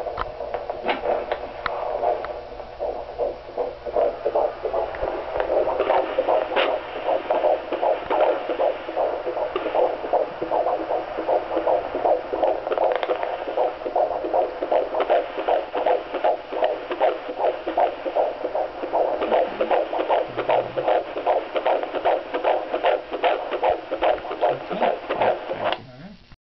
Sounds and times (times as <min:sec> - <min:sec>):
Speech: 0:24.5 - 0:26.3.